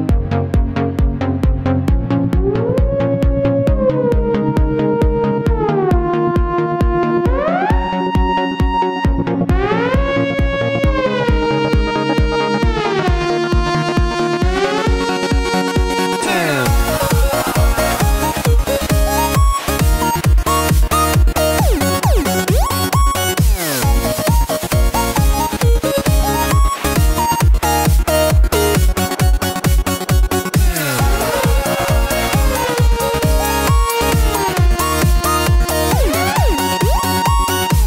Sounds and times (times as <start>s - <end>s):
Music: 0.0s - 37.8s.